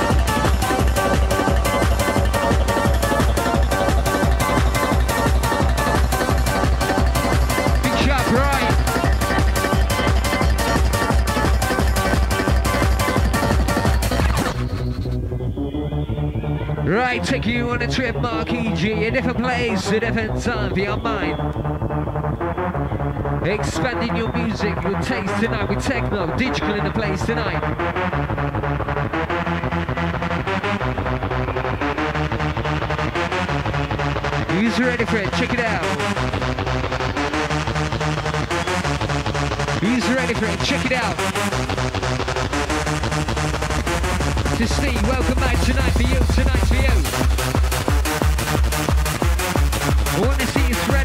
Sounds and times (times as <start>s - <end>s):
Techno: 0.0s - 51.0s
Speech: 7.8s - 9.0s, 16.6s - 21.4s, 23.4s - 27.6s, 34.5s - 36.0s, 39.8s - 41.2s, 44.6s - 47.1s, 50.2s - 51.0s.